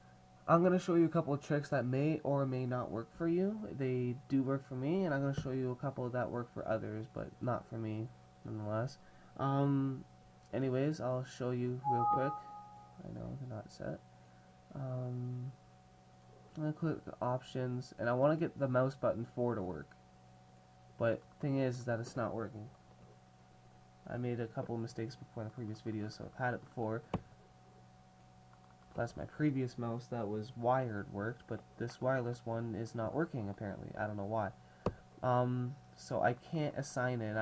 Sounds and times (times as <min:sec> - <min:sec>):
Speech: 0:00.5 - 0:14.0, 0:14.7 - 0:15.6, 0:16.5 - 0:20.0, 0:21.0 - 0:22.8, 0:24.0 - 0:27.2, 0:28.9 - 0:34.6, 0:35.2 - 0:37.4.